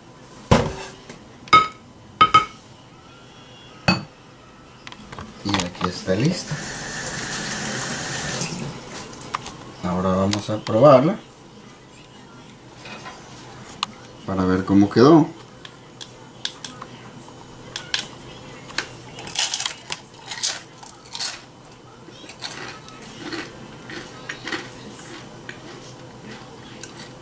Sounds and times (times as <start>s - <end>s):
Speech: 5.4s - 6.6s, 9.8s - 21.1s.